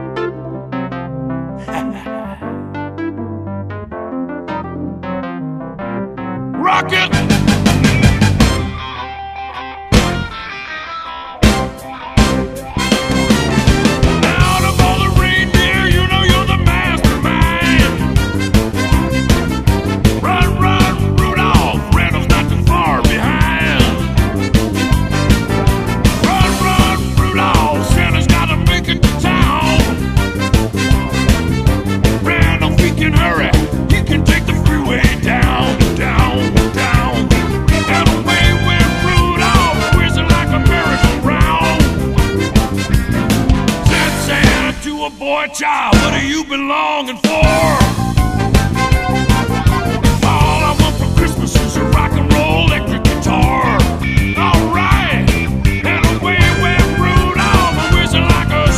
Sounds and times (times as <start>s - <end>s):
Music: 0.0s - 58.7s.